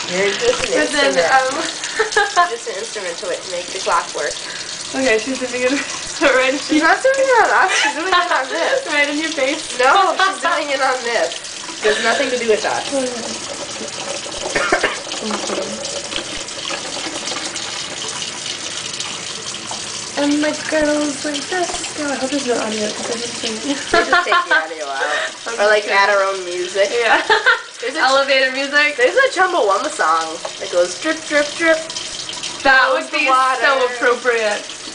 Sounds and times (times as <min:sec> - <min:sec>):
Bathtub (filling or washing): 0:00.0 - 0:34.9
Sink (filling or washing): 0:00.0 - 0:34.9
Water: 0:00.0 - 0:34.9
Water tap, faucet: 0:00.0 - 0:34.9.